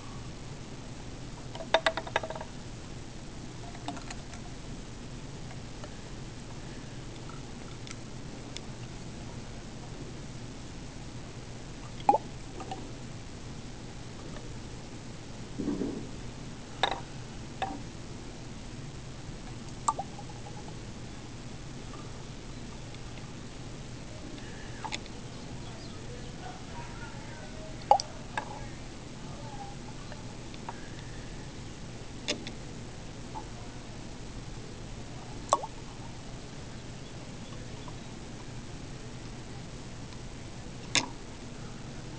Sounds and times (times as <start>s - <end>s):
Speech: 25.1s - 30.4s.